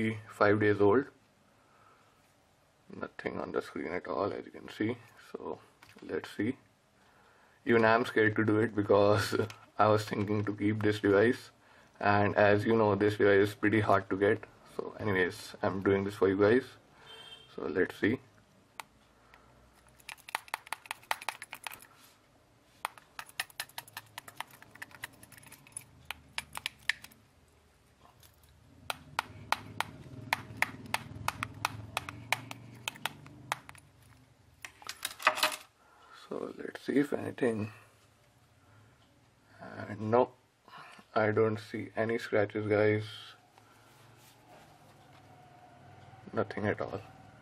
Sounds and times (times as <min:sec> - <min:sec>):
Speech: 0:00.0 - 0:01.2, 0:02.9 - 0:06.6, 0:07.7 - 0:16.8, 0:17.6 - 0:18.3, 0:36.2 - 0:37.8, 0:39.6 - 0:40.4, 0:41.1 - 0:43.4, 0:46.3 - 0:47.1.